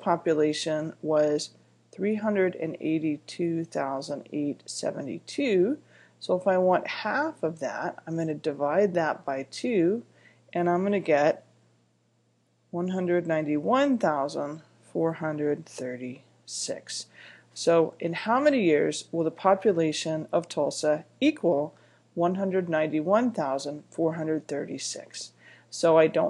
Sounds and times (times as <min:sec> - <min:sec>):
Speech: 0:00.0 - 0:11.5, 0:12.8 - 0:26.3.